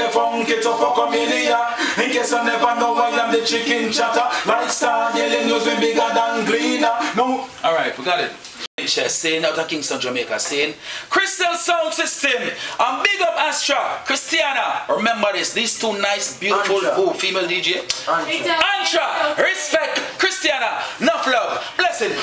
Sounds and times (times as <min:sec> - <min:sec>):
Speech: 0:07.1 - 0:22.2.